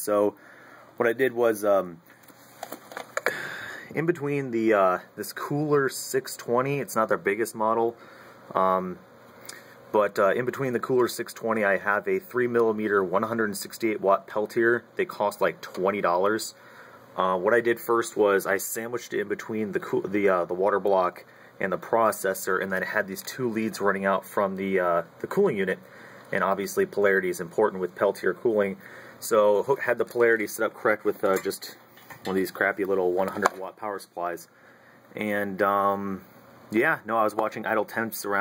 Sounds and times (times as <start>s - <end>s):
Speech: 0.0s - 0.4s, 1.0s - 2.0s, 3.9s - 9.0s, 9.9s - 16.6s, 17.2s - 34.5s, 35.1s - 38.4s.